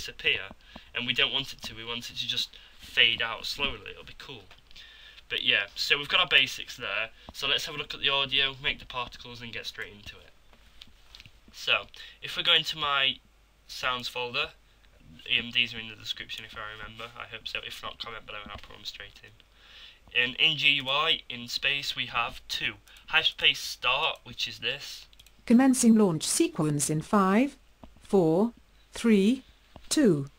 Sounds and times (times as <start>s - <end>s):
Narration, monologue: 0.0s - 30.3s.